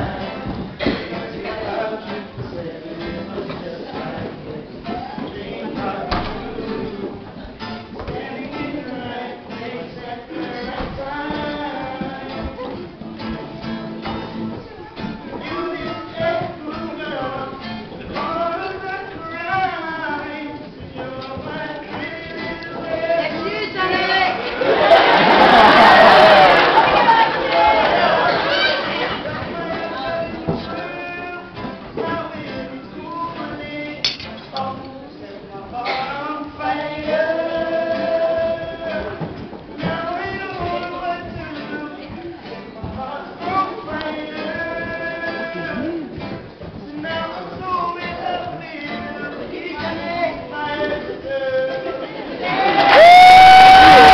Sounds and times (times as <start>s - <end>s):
Male singing: 0.0s - 13.0s, 14.5s - 54.1s
Music: 0.0s - 54.1s.